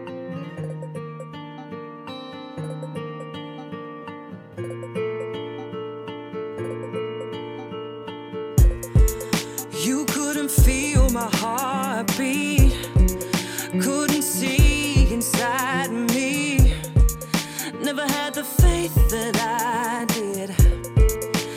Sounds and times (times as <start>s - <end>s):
Tender music: 8.6s - 21.5s.